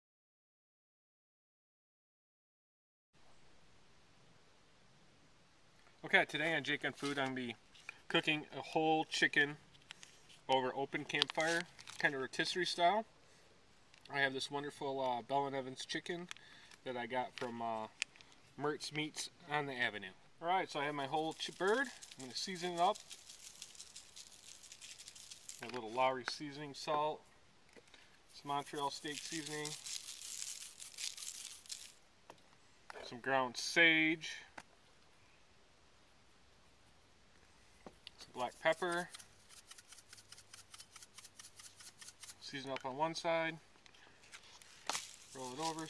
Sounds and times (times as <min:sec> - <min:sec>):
Speech: 0:06.0 - 0:09.6, 0:10.5 - 0:13.1, 0:14.1 - 0:17.9, 0:18.6 - 0:23.0, 0:25.6 - 0:27.2, 0:28.4 - 0:29.8, 0:32.9 - 0:34.5, 0:38.3 - 0:39.1, 0:42.4 - 0:43.6, 0:45.4 - 0:45.8.